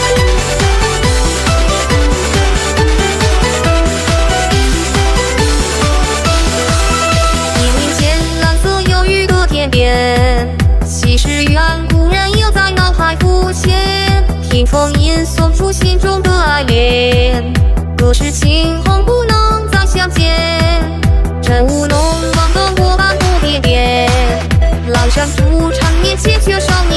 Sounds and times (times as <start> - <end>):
Music: 0.0 - 26.9.